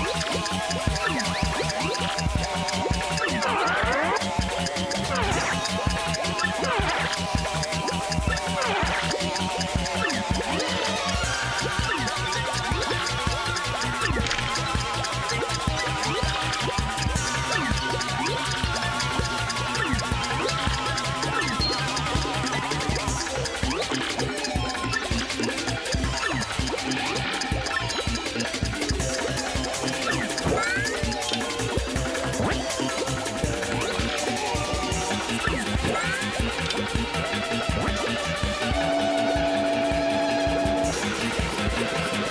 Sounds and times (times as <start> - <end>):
Music: 0.0 - 42.3.